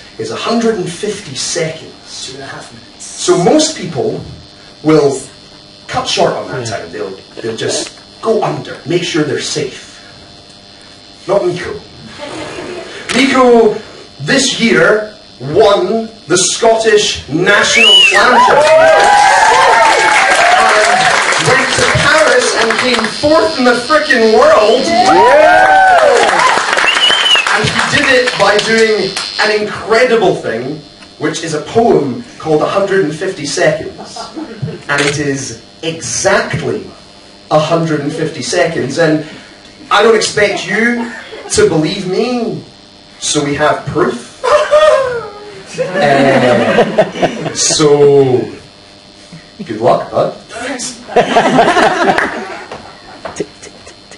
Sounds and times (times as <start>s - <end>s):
Speech: 0.2s - 5.3s, 5.9s - 10.0s, 11.2s - 11.9s, 13.1s - 18.6s, 21.4s - 25.2s, 27.6s - 34.2s, 34.9s - 39.3s, 39.9s - 44.3s, 47.6s - 48.7s, 49.6s - 51.0s.